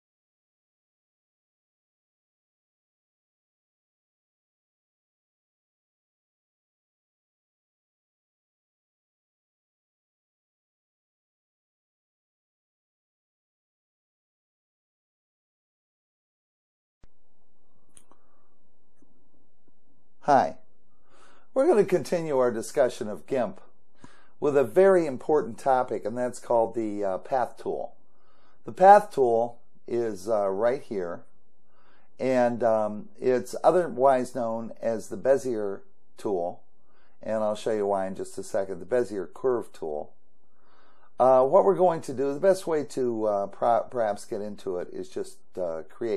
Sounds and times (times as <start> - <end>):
Silence: 17.0 - 21.6, 31.0 - 32.2, 40.0 - 41.2
Inside, small room: 17.0 - 46.1
Speech: 20.2 - 20.6, 21.5 - 23.7, 24.4 - 28.0, 28.6 - 31.3, 32.2 - 36.6, 37.2 - 40.2, 41.2 - 46.1.